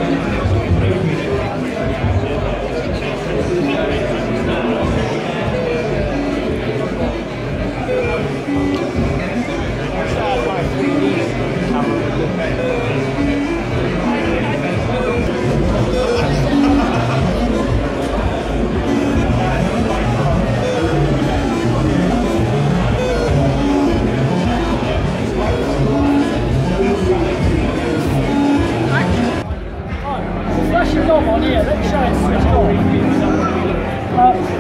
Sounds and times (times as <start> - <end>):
Music: 0.0 - 34.6
Speech: 0.0 - 34.6.